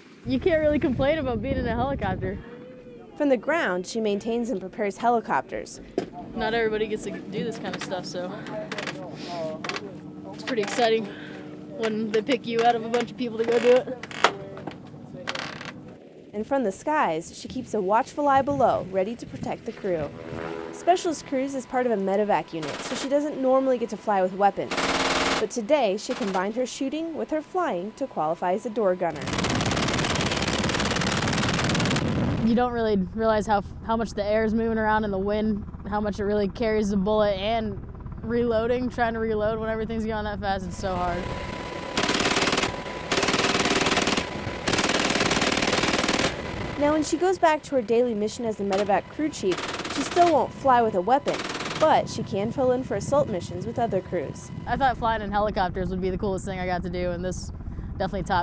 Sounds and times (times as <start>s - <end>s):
Speech: 0.3s - 11.1s, 11.8s - 15.4s, 16.4s - 20.1s, 20.8s - 24.8s, 25.4s - 29.2s, 32.4s - 41.3s, 46.8s - 58.4s
Vehicle: 3.4s - 58.4s.